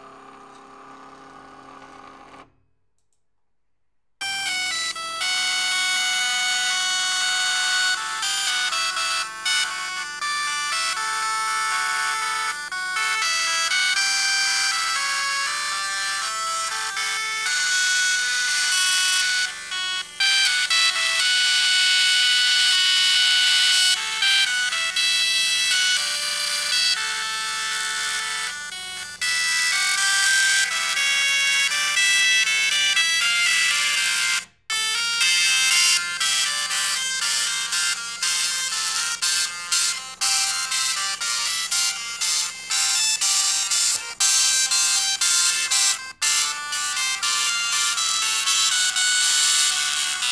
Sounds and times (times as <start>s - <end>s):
Printer: 0.0s - 2.6s, 13.2s - 34.1s, 37.7s - 50.3s
Music: 4.2s - 50.3s.